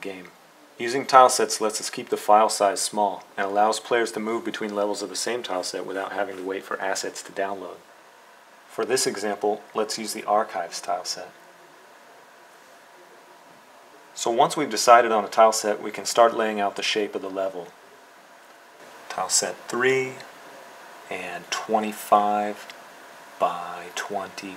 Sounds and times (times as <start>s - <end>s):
Speech: 0.0s - 7.9s, 8.7s - 11.8s, 14.0s - 17.8s, 19.1s - 20.4s, 21.1s - 22.8s, 23.4s - 24.5s.